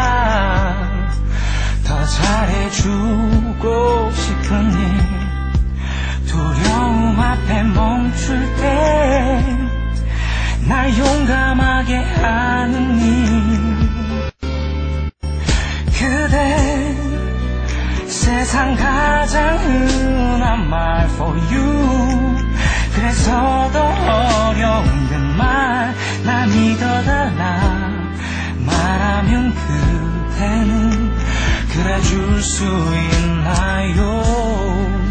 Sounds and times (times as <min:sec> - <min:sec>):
Male singing: 0:00.0 - 0:01.2, 0:01.8 - 0:05.4, 0:06.3 - 0:09.7, 0:10.6 - 0:14.1, 0:15.9 - 0:17.2, 0:18.1 - 0:35.1
Music: 0:00.0 - 0:35.1.